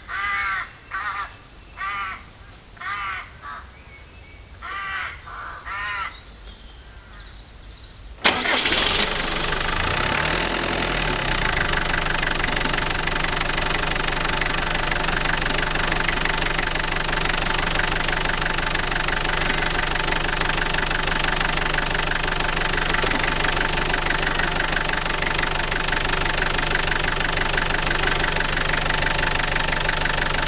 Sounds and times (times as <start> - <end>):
Medium engine (mid frequency): 8.2 - 30.4.